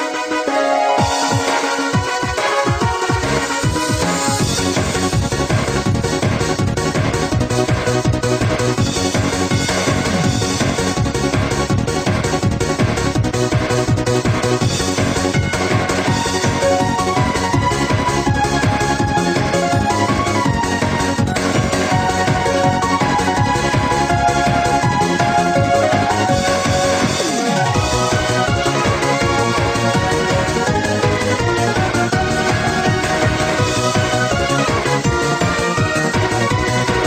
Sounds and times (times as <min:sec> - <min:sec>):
Music: 0:00.0 - 0:37.0.